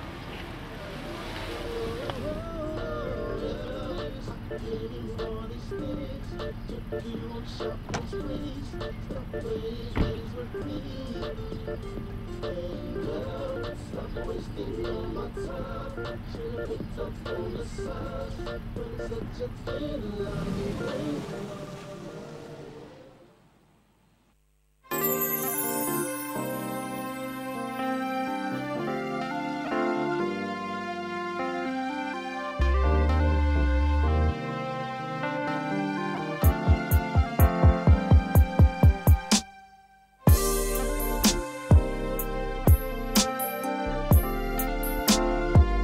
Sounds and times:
Music: 2.0s - 20.2s, 24.9s - 45.8s.

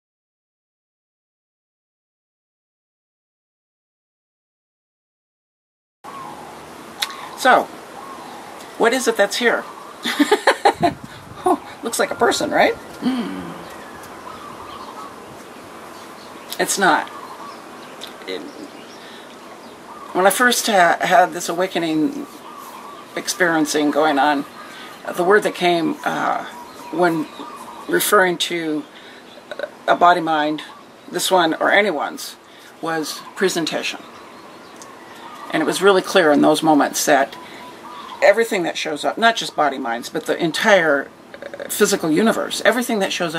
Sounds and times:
Outside, rural or natural: 6.0s - 43.3s
Speech: 7.4s - 7.7s, 8.8s - 9.7s, 11.4s - 13.6s, 16.5s - 17.1s, 18.0s - 18.7s, 20.1s - 22.3s, 23.2s - 28.9s, 29.5s - 34.0s, 35.5s - 37.4s, 38.2s - 43.3s.

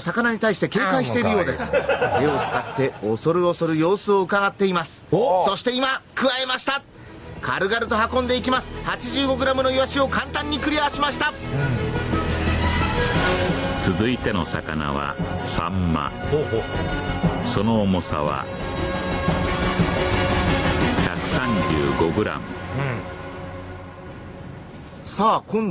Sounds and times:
Speech: 0.0s - 6.8s, 7.4s - 11.4s, 13.9s - 16.6s, 17.4s - 18.5s, 21.0s - 23.0s, 25.1s - 25.7s
Music: 6.9s - 25.0s.

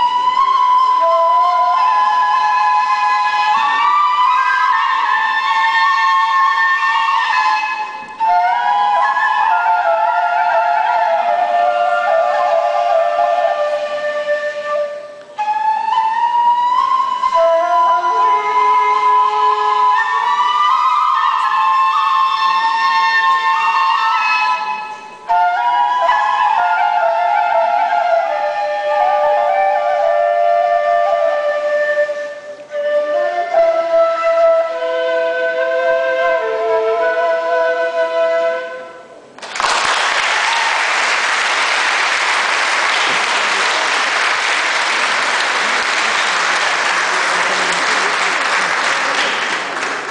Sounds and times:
Classical music: 0.0s - 50.1s
Applause: 39.4s - 50.1s.

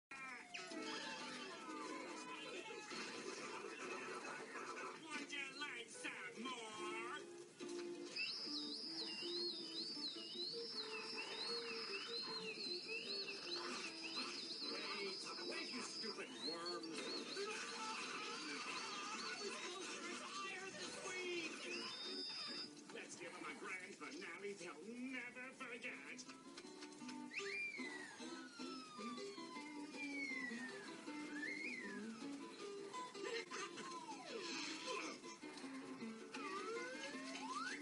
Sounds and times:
Whistle: 8.0s - 20.0s, 21.4s - 22.8s, 27.1s - 32.6s, 36.4s - 37.8s.

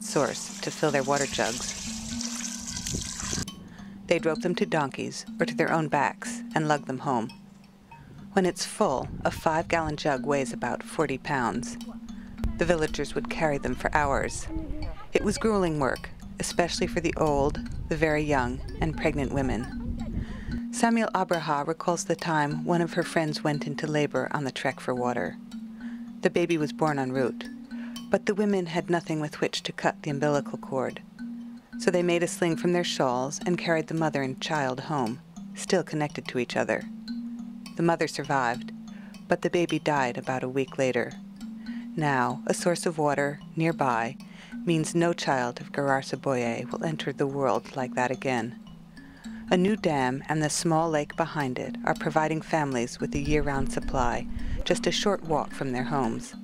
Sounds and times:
Speech: 0.0s - 1.6s, 4.1s - 7.3s, 8.4s - 11.8s, 12.5s - 19.8s, 20.8s - 25.3s, 26.3s - 27.4s, 28.2s - 31.0s, 31.8s - 36.8s, 37.8s - 38.6s, 39.3s - 41.1s, 42.0s - 48.5s, 49.5s - 56.4s
Music: 0.0s - 56.4s.

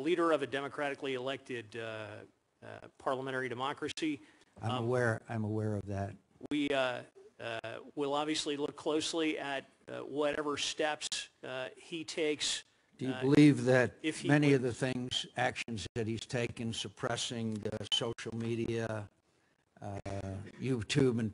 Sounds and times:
Speech: 0.0s - 19.1s, 19.8s - 21.3s.

